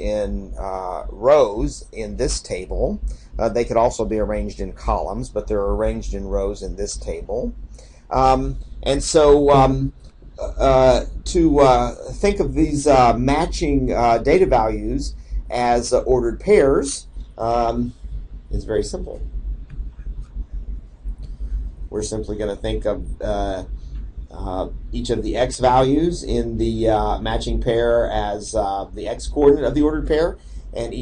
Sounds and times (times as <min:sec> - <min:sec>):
Speech: 0:00.0 - 0:18.0, 0:18.6 - 0:19.2, 0:21.9 - 0:23.7, 0:24.3 - 0:31.0.